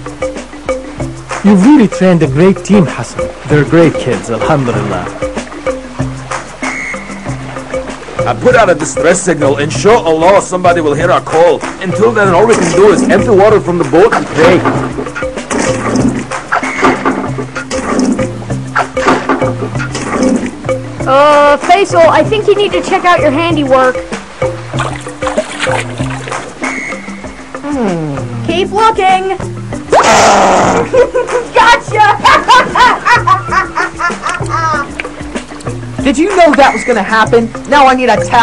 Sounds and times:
Music: 0.0s - 38.4s.

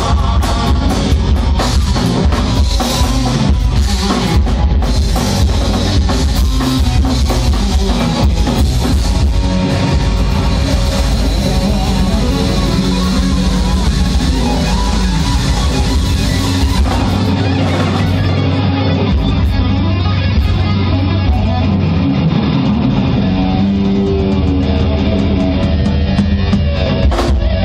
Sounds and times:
Bass drum: 0.0s - 19.8s
Drum kit: 0.0s - 27.6s.

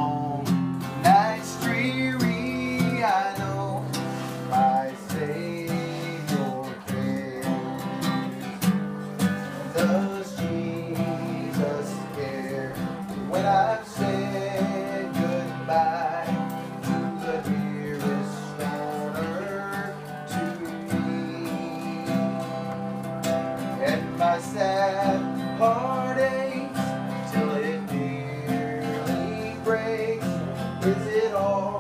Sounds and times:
Male singing: 0.0s - 23.0s, 23.6s - 31.8s
Music: 0.0s - 31.8s.

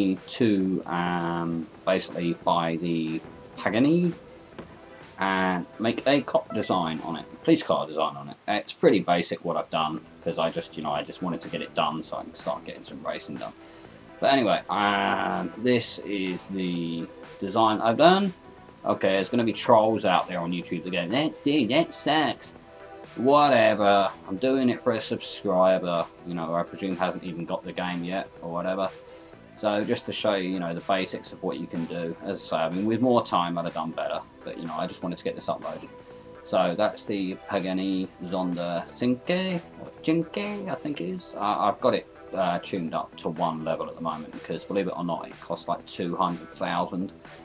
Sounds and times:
Speech: 0.0s - 4.2s, 5.2s - 13.6s, 14.2s - 22.5s, 23.2s - 28.9s, 29.6s - 35.9s, 36.5s - 47.1s
Music: 0.0s - 47.4s.

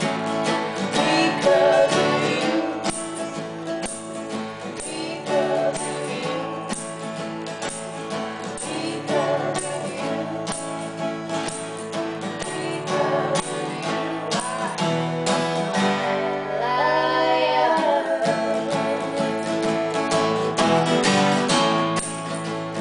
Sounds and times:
Guitar: 0.0s - 22.8s
Singing: 0.7s - 3.5s, 4.6s - 6.9s, 8.4s - 10.8s, 12.2s - 15.0s, 16.4s - 20.4s.

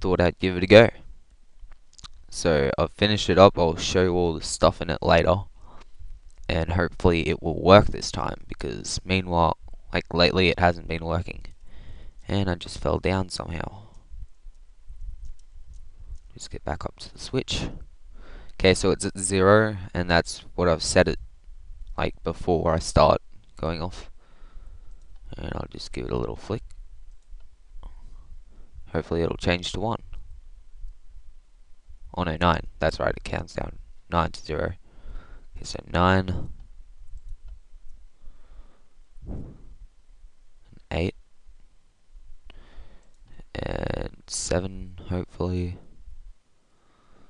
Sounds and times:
Speech: 0.0s - 1.1s, 2.3s - 5.5s, 6.5s - 11.5s, 12.3s - 13.9s, 16.4s - 17.8s, 18.6s - 21.2s, 22.0s - 24.1s, 25.3s - 26.6s, 28.9s - 30.0s, 32.1s - 34.8s, 35.6s - 36.6s, 40.8s - 41.2s, 43.4s - 45.8s.

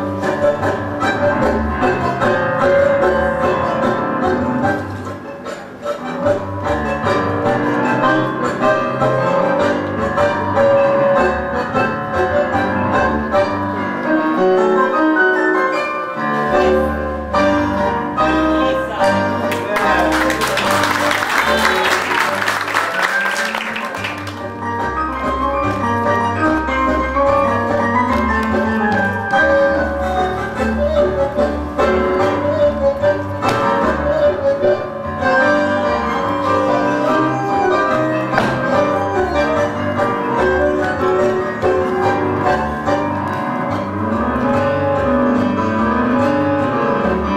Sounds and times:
Music of Latin America: 0.0s - 47.3s
Opera: 0.0s - 47.3s.

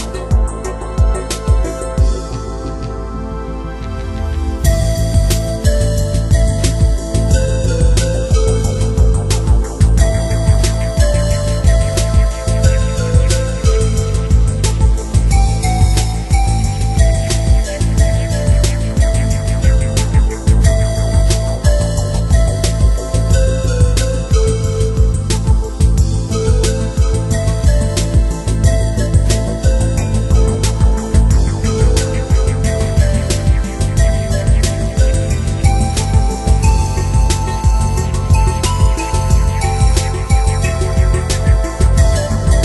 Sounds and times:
Music: 0.0s - 42.6s.

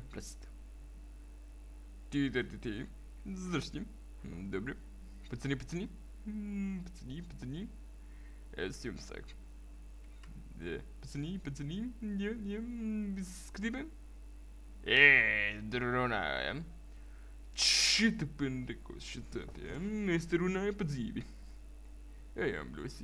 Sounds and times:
Speech: 0.0s - 0.6s, 2.1s - 7.8s, 8.5s - 9.4s, 10.6s - 14.0s, 14.8s - 16.7s, 17.6s - 21.4s, 22.4s - 23.0s.

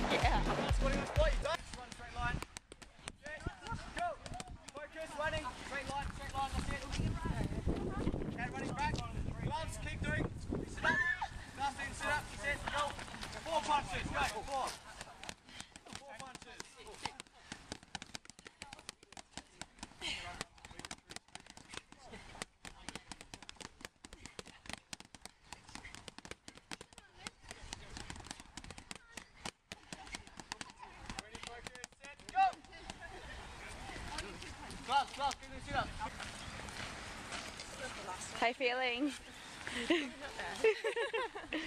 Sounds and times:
Clip-clop: 11.2s - 41.6s.

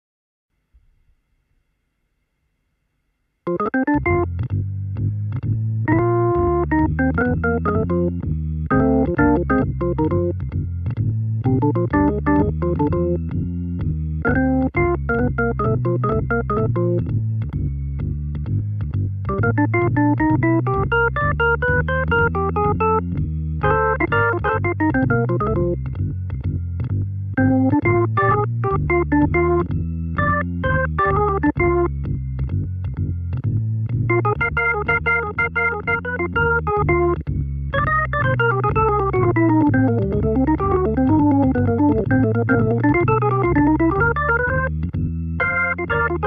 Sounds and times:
Synthesizer: 3.5s - 46.2s.

